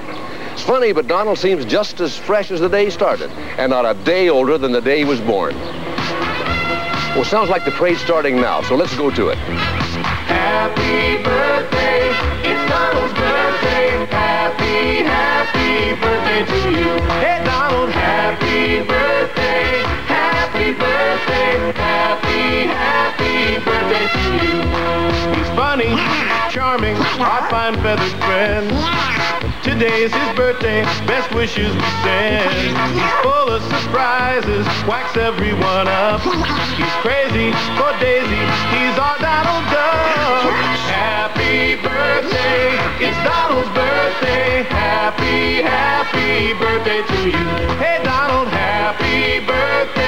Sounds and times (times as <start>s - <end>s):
Music: 4.2s - 50.0s.